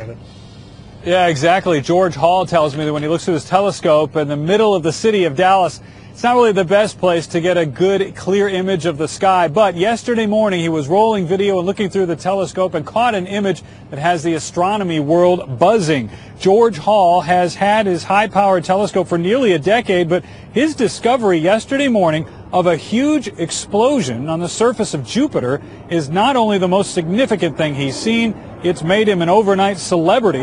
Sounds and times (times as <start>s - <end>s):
Speech: 0.0s - 0.2s, 1.0s - 30.4s.